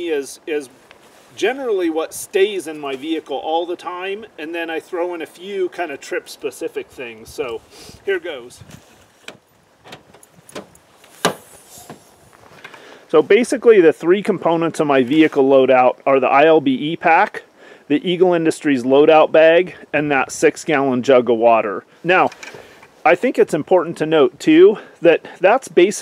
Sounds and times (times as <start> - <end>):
Speech: 0.0 - 8.6, 13.1 - 22.4, 23.0 - 26.0.